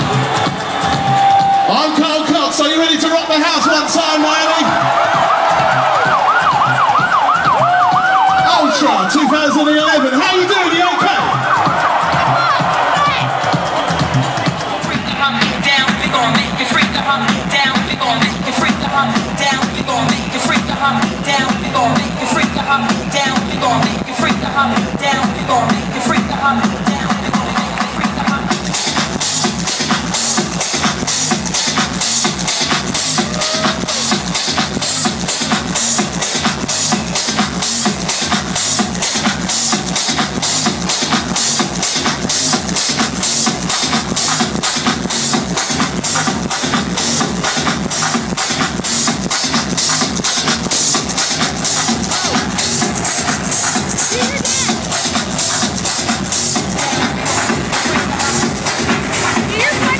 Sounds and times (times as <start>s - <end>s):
Dance music: 0.0s - 59.9s
Pop music: 0.0s - 59.9s.